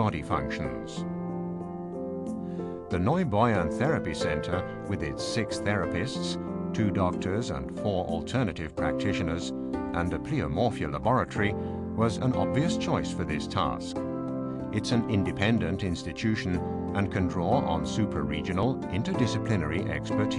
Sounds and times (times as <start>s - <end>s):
Speech: 0.0s - 1.0s, 2.9s - 14.0s, 14.8s - 20.3s
Music: 0.0s - 20.3s.